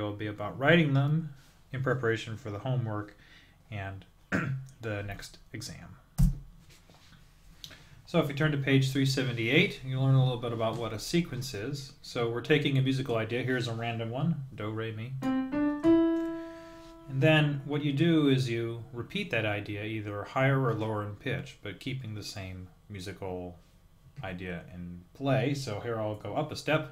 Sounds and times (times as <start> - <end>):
Speech: 0.0 - 6.0, 8.1 - 15.2, 17.1 - 23.6, 24.2 - 26.9
Music: 15.2 - 17.7.